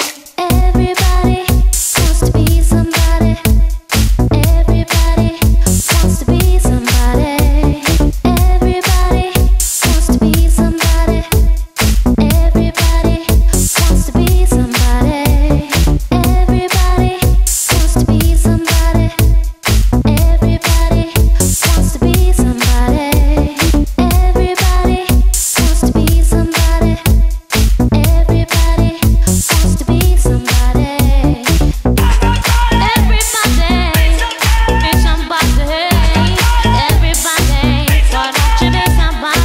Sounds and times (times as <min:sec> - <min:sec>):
Dance music: 0:00.0 - 0:39.4
House music: 0:00.0 - 0:39.4.